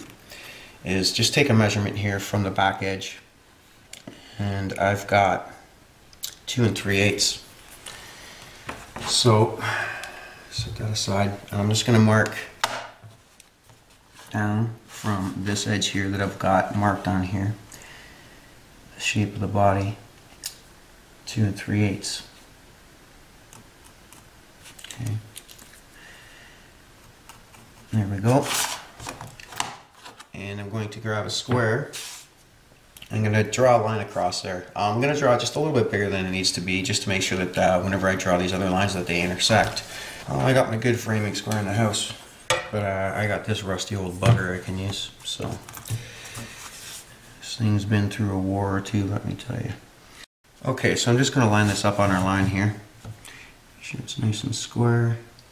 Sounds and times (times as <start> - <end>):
Speech: 0.8 - 3.3, 4.4 - 5.7, 6.3 - 7.5, 9.0 - 9.8, 10.5 - 12.6, 14.3 - 17.6, 19.0 - 20.0, 21.2 - 22.4, 24.9 - 25.3, 27.9 - 28.6, 30.3 - 32.0, 33.0 - 45.7, 47.4 - 49.8, 50.6 - 52.9, 53.8 - 55.3.